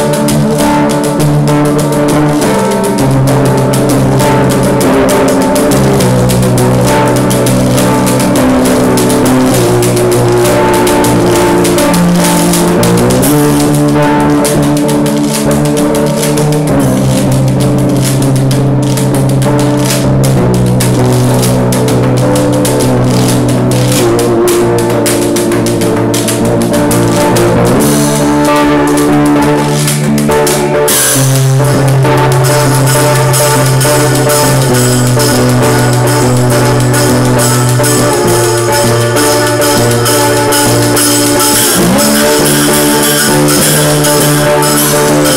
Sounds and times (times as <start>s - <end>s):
Guitar: 0.0s - 45.3s
Percussion: 0.0s - 45.3s.